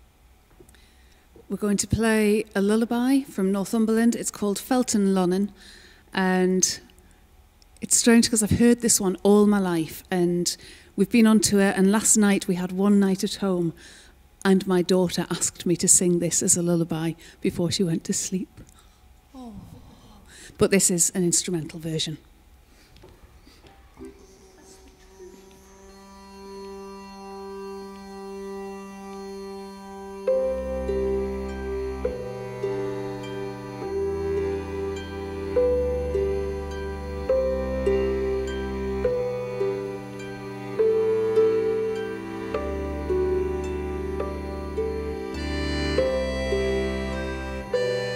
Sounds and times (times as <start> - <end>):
Speech: 1.5 - 5.6, 6.2 - 6.9, 7.8 - 13.8, 14.4 - 18.6, 19.4 - 22.3, 24.0 - 25.6
Music: 23.2 - 48.1.